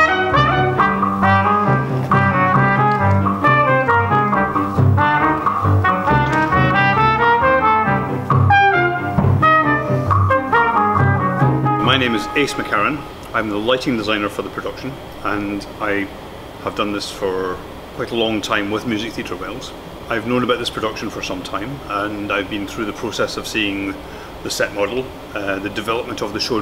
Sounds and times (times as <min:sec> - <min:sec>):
Classical music: 0:00.0 - 0:13.1
Speech: 0:11.8 - 0:26.6.